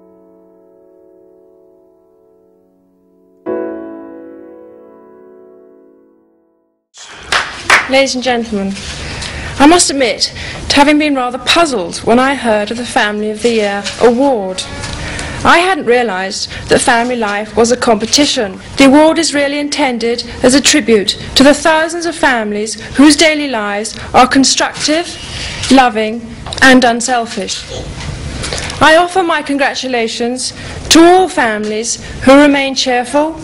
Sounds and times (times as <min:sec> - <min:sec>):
Female speech, woman speaking: 0:07.9 - 0:08.8, 0:09.6 - 0:14.8, 0:15.4 - 0:27.7, 0:28.8 - 0:33.4
Narration, monologue: 0:07.9 - 0:33.4.